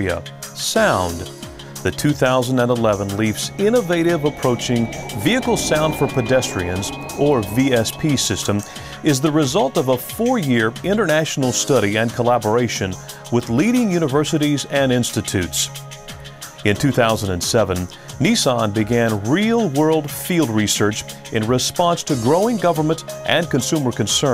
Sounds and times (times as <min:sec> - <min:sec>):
Speech: 0:00.0 - 0:15.8, 0:16.6 - 0:24.3
Music: 0:00.0 - 0:24.3.